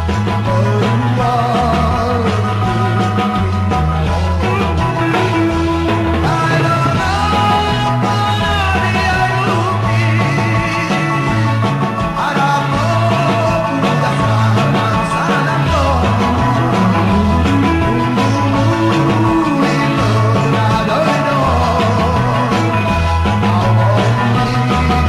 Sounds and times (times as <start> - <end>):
Psychedelic rock: 0.0 - 25.0
Rock and roll: 0.0 - 25.0.